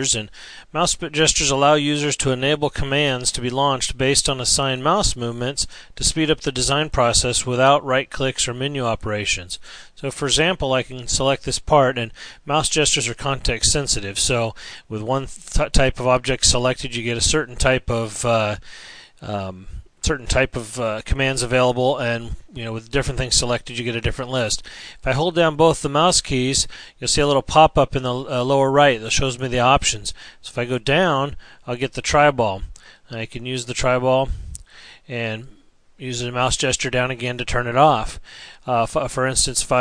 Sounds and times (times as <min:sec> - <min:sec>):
Speech: 0:00.0 - 0:18.6, 0:19.2 - 0:39.8.